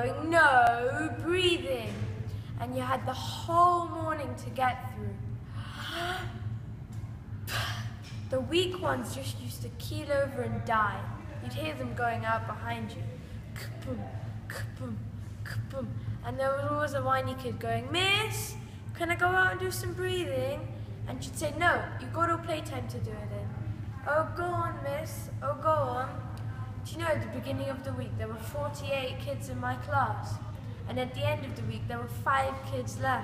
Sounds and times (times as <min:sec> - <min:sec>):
Speech: 0:00.0 - 0:05.2, 0:08.3 - 0:33.2.